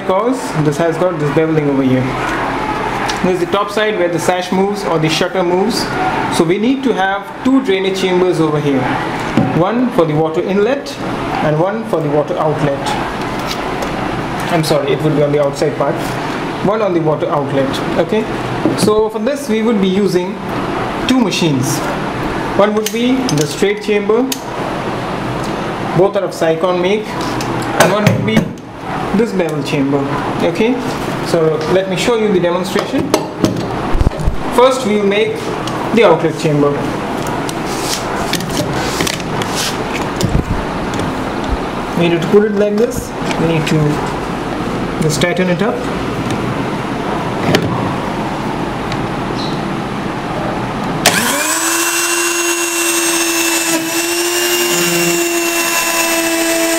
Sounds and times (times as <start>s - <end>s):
Speech: 0.0s - 2.2s, 3.2s - 8.9s, 9.5s - 13.1s, 14.5s - 20.4s, 21.1s - 22.0s, 22.6s - 24.4s, 26.0s - 33.2s, 34.5s - 36.9s, 42.0s - 44.1s, 45.0s - 45.9s.